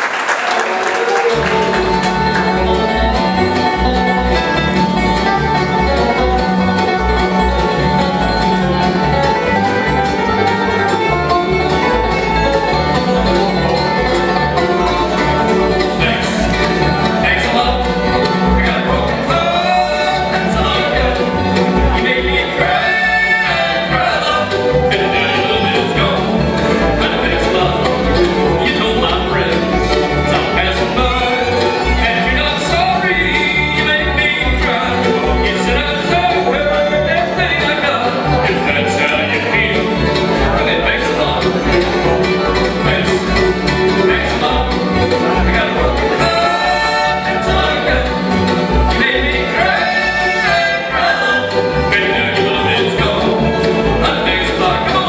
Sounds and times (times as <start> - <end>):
Bluegrass: 0.0 - 55.0.